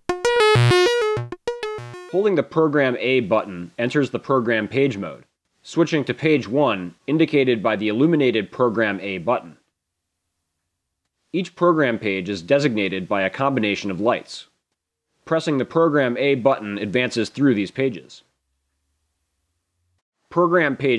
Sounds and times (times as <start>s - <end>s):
Speech: 2.1s - 9.7s, 11.4s - 14.6s, 15.3s - 18.3s, 20.3s - 20.9s.